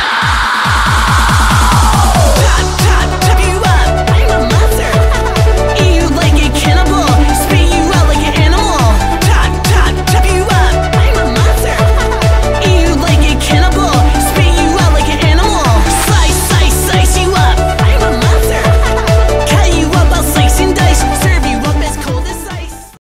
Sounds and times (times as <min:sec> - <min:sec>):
Music: 0:00.0 - 0:23.0.